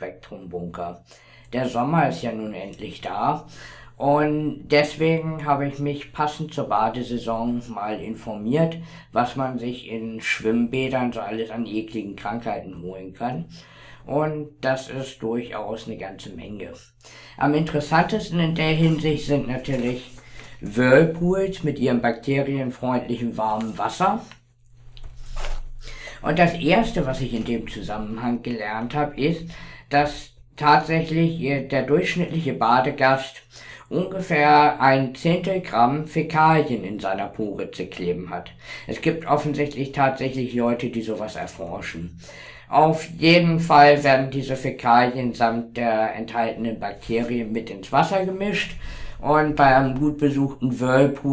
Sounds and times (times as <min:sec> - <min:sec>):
Speech: 0:00.0 - 0:24.4, 0:26.2 - 0:51.3.